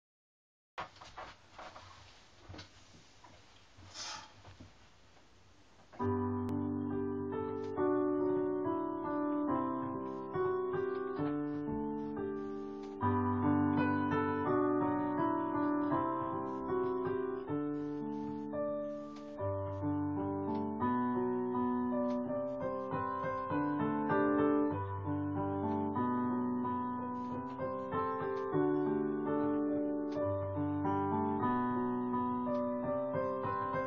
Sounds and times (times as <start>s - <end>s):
Electric piano: 6.0s - 33.8s.